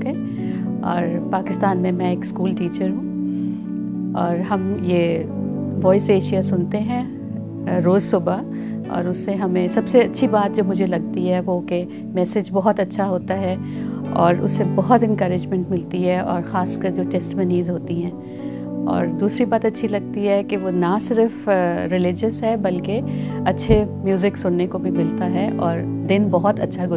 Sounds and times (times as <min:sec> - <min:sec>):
Music: 0:00.0 - 0:26.9
Speech: 0:00.8 - 0:03.0, 0:04.2 - 0:07.1, 0:07.7 - 0:18.1, 0:18.9 - 0:26.9.